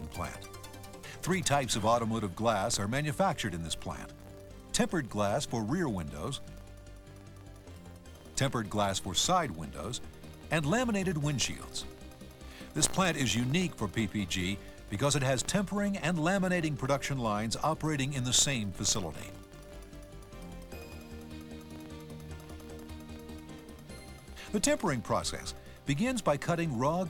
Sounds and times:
Speech: 0:00.0 - 0:00.5, 0:01.2 - 0:04.1, 0:04.8 - 0:06.4, 0:08.4 - 0:11.9, 0:12.8 - 0:19.4, 0:24.5 - 0:27.1
Music: 0:00.0 - 0:27.1.

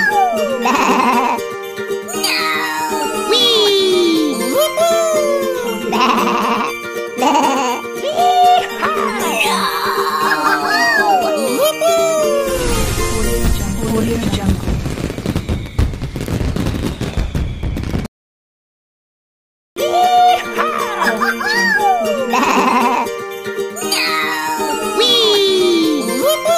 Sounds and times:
Speech: 0:00.0 - 0:01.4, 0:02.4 - 0:06.1, 0:08.1 - 0:14.7, 0:19.8 - 0:23.0, 0:23.8 - 0:26.5
Music: 0:00.0 - 0:16.9, 0:19.8 - 0:26.5.

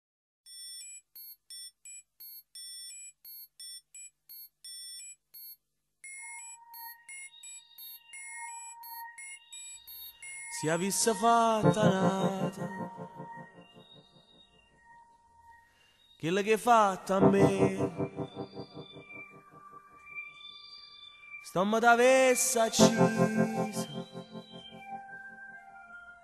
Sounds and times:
Music: 0:06.4 - 0:16.2, 0:17.2 - 0:20.4, 0:22.7 - 0:26.2.

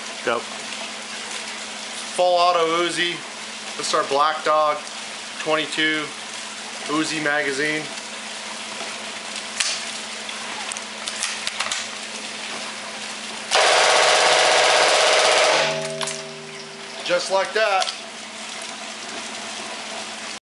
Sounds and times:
Speech: 0:00.2 - 0:00.5, 0:02.2 - 0:03.2, 0:03.8 - 0:04.8, 0:05.4 - 0:06.2, 0:06.9 - 0:07.9, 0:17.0 - 0:17.9.

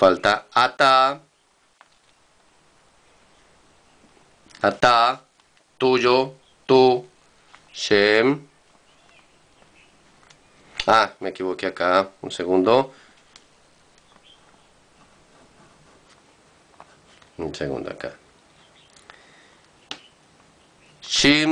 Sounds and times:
Speech: 0:00.0 - 0:01.3, 0:04.6 - 0:07.1, 0:07.8 - 0:09.3, 0:10.8 - 0:13.0, 0:17.4 - 0:18.2, 0:21.0 - 0:21.5.

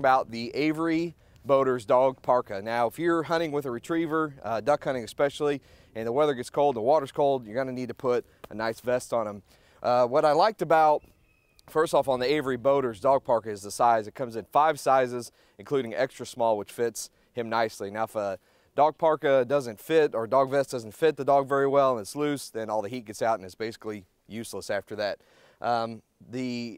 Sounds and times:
Speech: 0:00.0 - 0:11.0, 0:11.7 - 0:26.7.

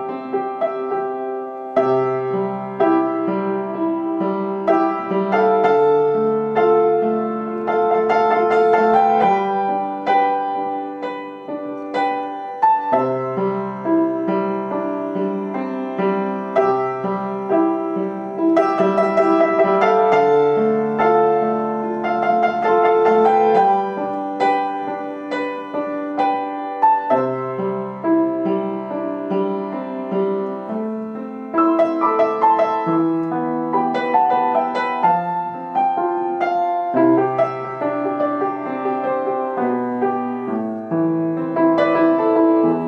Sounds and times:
Music: 0:00.0 - 0:42.8.

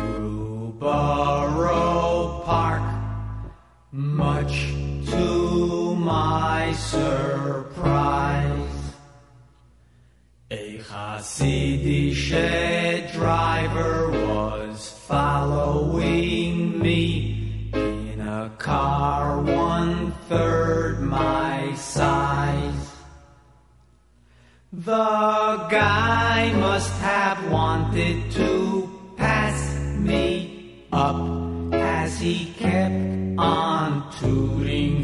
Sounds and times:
Music: 0:00.0 - 0:35.0.

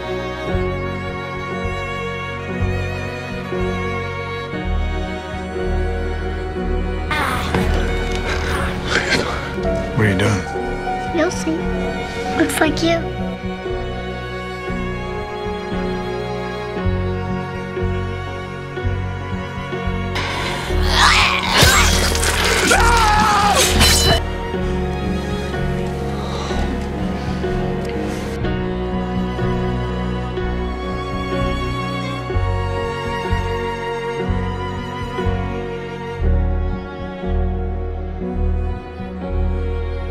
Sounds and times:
Music: 0:00.0 - 0:40.1.

